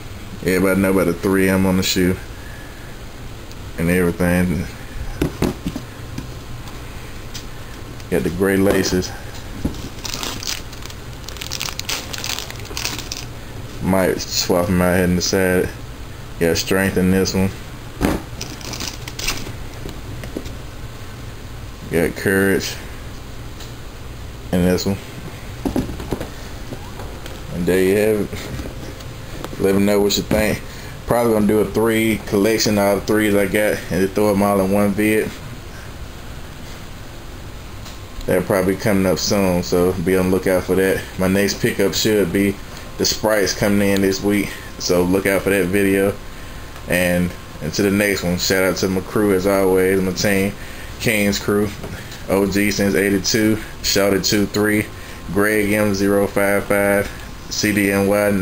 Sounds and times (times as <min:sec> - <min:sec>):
Inside, small room: 0:00.0 - 0:58.4
Speech: 0:00.4 - 0:02.3, 0:03.8 - 0:04.8, 0:08.1 - 0:09.2, 0:13.8 - 0:15.8, 0:16.4 - 0:17.6, 0:21.9 - 0:22.9, 0:24.5 - 0:25.1, 0:27.5 - 0:28.6, 0:29.6 - 0:35.4, 0:38.2 - 0:46.2, 0:46.9 - 0:58.4.